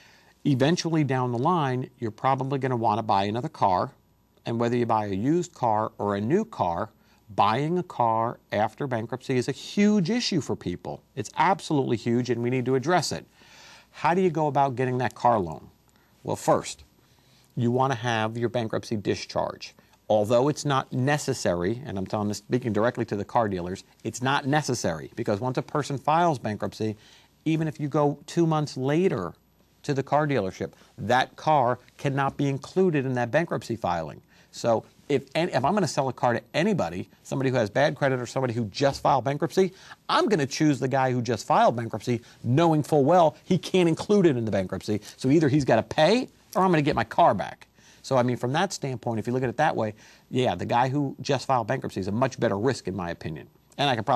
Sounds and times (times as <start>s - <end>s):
Speech: 0.4s - 13.3s, 13.9s - 16.9s, 17.6s - 54.1s.